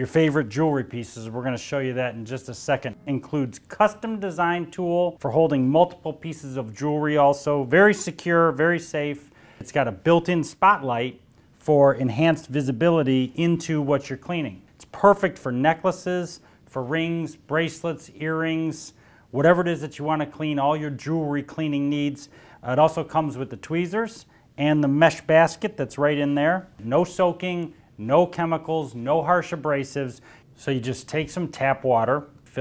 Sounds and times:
Speech: 0:00.0 - 0:32.6.

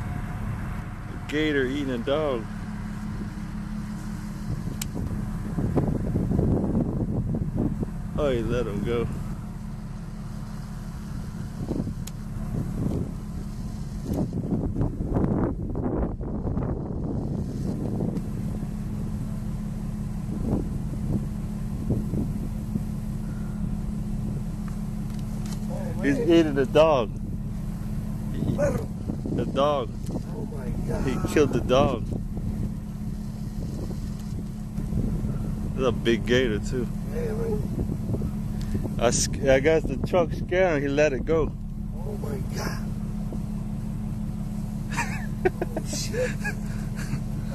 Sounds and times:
Speech: 0:01.1 - 0:02.5, 0:08.2 - 0:09.1, 0:25.6 - 0:27.1, 0:28.4 - 0:32.1, 0:35.8 - 0:37.7, 0:39.0 - 0:42.9, 0:45.5 - 0:46.4.

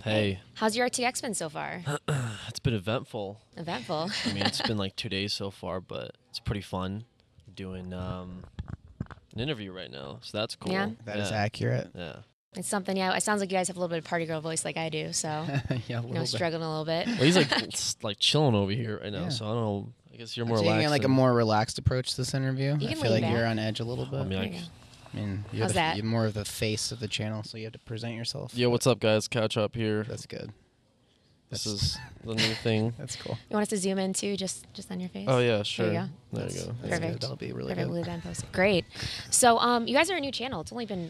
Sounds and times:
Speech: 0:00.0 - 0:07.0, 0:07.6 - 0:08.4, 0:09.4 - 0:30.5, 0:31.6 - 0:41.0.

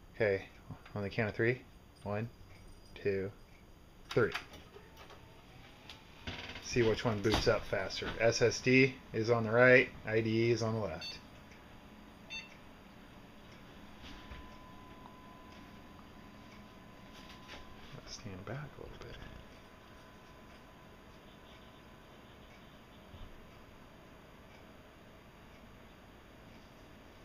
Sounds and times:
Inside, small room: 0:00.0 - 0:27.2
Speech: 0:00.2 - 0:02.3, 0:03.0 - 0:03.4, 0:04.1 - 0:04.4, 0:06.7 - 0:11.2, 0:17.9 - 0:19.4.

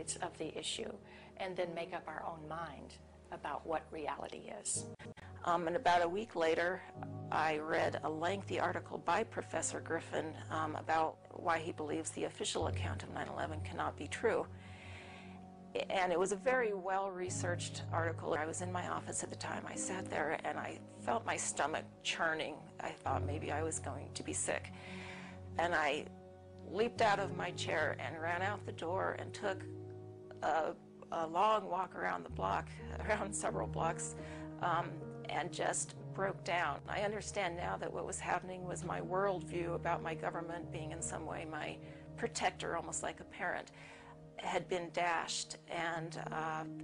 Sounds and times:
Speech: 0:00.0 - 0:14.5, 0:15.8 - 0:24.7, 0:25.6 - 0:26.0, 0:26.7 - 0:29.6, 0:30.3 - 0:43.7, 0:44.4 - 0:46.8
Inside, small room: 0:00.0 - 0:46.8
Music: 0:00.0 - 0:46.8.

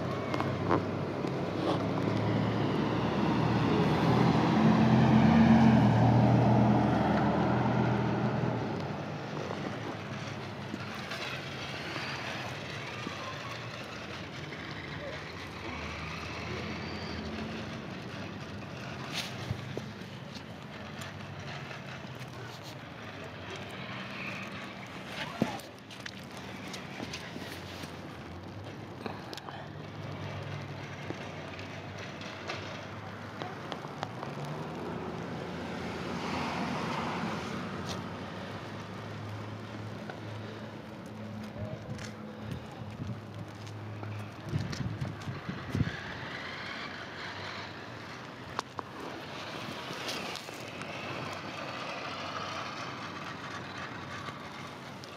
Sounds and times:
Outside, urban or manmade: 0:00.0 - 0:55.1
Vehicle: 0:00.0 - 0:55.1.

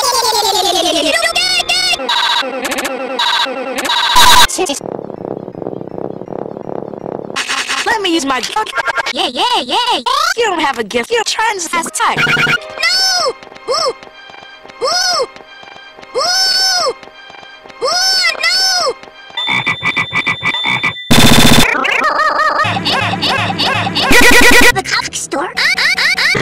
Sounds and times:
Music: 0:11.3 - 0:21.1.

